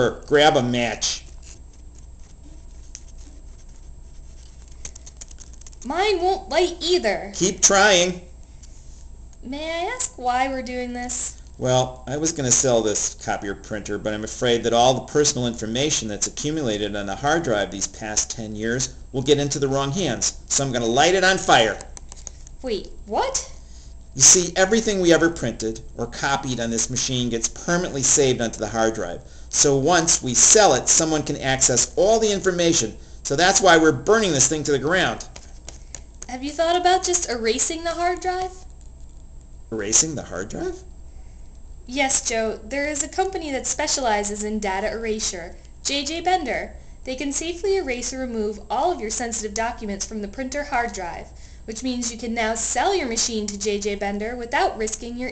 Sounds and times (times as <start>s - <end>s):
Speech: 0.0s - 1.2s, 5.9s - 8.3s, 9.5s - 21.9s, 22.6s - 23.6s, 24.2s - 35.3s, 36.3s - 38.7s, 39.7s - 40.9s, 41.9s - 55.3s.